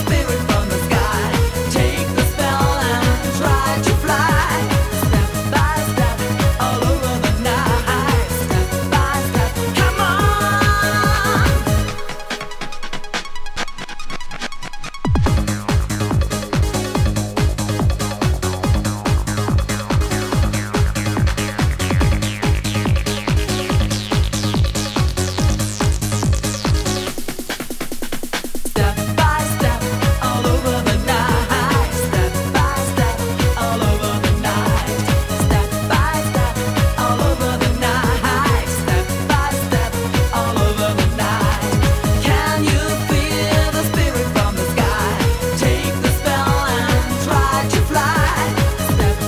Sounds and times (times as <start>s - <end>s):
Techno: 0.0s - 49.2s
Trance music: 0.0s - 49.2s.